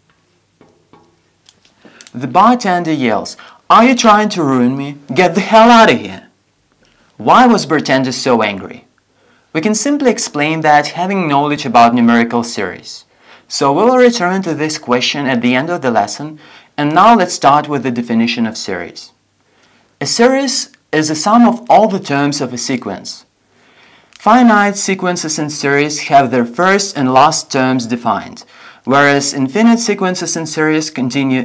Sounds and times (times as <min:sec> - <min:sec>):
Speech: 0:02.1 - 0:06.4, 0:07.2 - 0:08.9, 0:09.5 - 0:19.2, 0:20.0 - 0:23.3, 0:24.2 - 0:31.4.